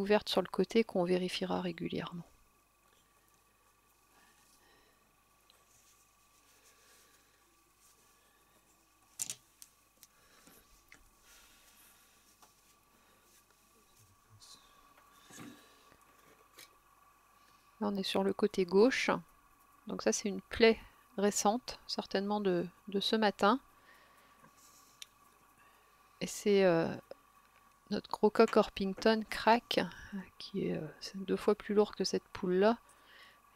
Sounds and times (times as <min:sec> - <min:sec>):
Speech: 0:00.0 - 0:02.3, 0:17.8 - 0:19.2, 0:19.9 - 0:23.6, 0:26.2 - 0:27.1, 0:27.9 - 0:32.8.